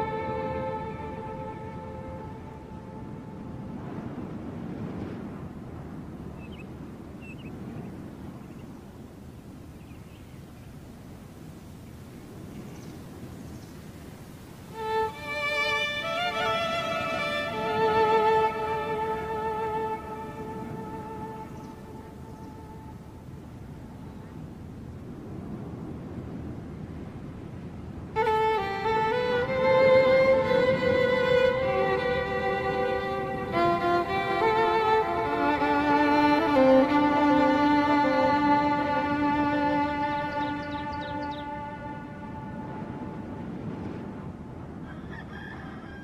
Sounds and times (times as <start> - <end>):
Sad music: 0.0 - 3.9, 14.7 - 23.4, 28.2 - 43.8.